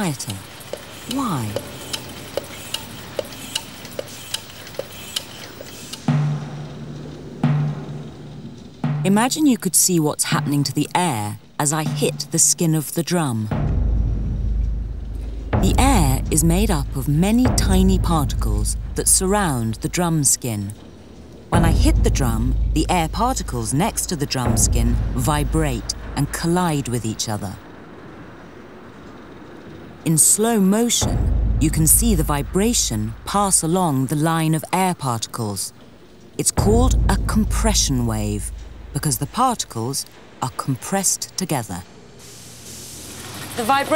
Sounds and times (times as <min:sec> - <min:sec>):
Speech: 0:00.0 - 0:00.5, 0:01.1 - 0:01.6, 0:09.1 - 0:13.6, 0:15.6 - 0:20.8, 0:21.6 - 0:27.6, 0:30.0 - 0:35.8, 0:36.4 - 0:41.9, 0:43.6 - 0:43.9.